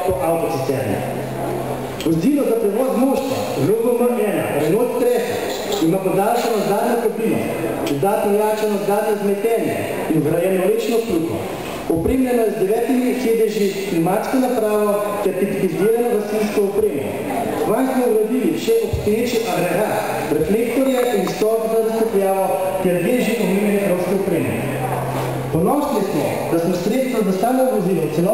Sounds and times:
Speech: 0.0 - 1.2, 2.0 - 28.3
Inside, large room or hall: 0.0 - 28.3.

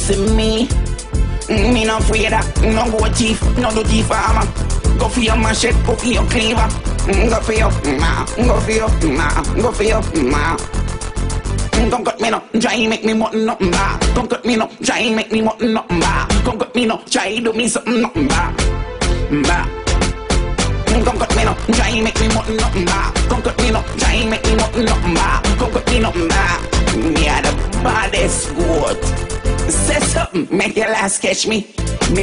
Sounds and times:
Music: 0.0 - 32.2.

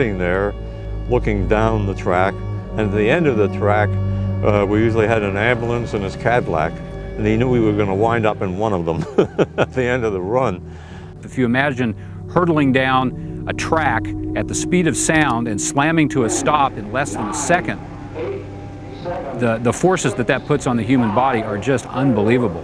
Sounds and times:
Speech: 0.0 - 0.5, 1.1 - 10.6, 11.2 - 18.4, 19.0 - 22.6
Music: 0.0 - 22.6.

